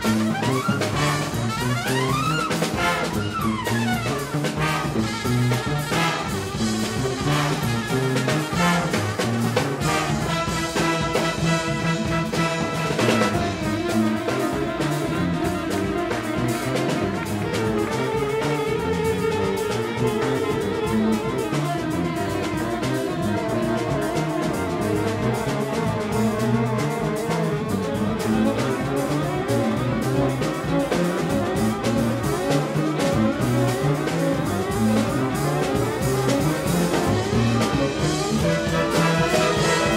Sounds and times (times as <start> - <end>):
Orchestra: 0.0 - 39.9
Trumpet: 0.0 - 39.9.